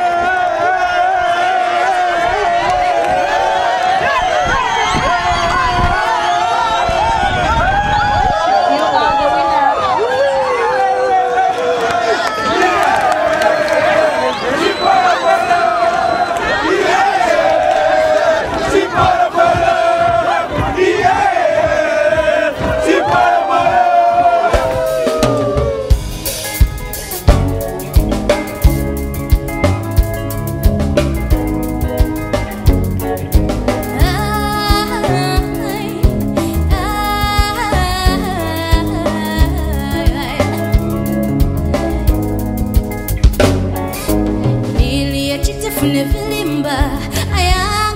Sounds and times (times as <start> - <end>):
Cheering: 0.0 - 26.0
Crowd: 0.0 - 47.9
Battle cry: 12.0 - 25.2.